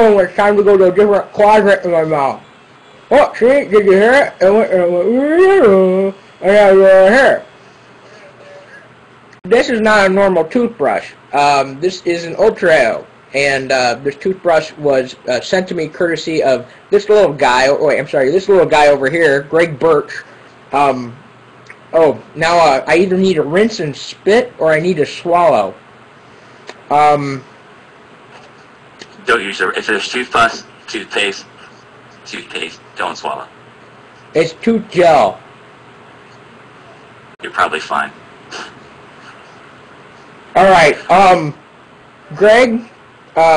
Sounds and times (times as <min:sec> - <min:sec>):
Speech: 0:00.0 - 0:02.4, 0:03.1 - 0:07.5, 0:09.5 - 0:21.2, 0:21.9 - 0:25.8, 0:26.9 - 0:27.5, 0:29.0 - 0:33.5, 0:34.3 - 0:35.4, 0:37.4 - 0:38.7, 0:40.6 - 0:41.6, 0:42.3 - 0:43.5.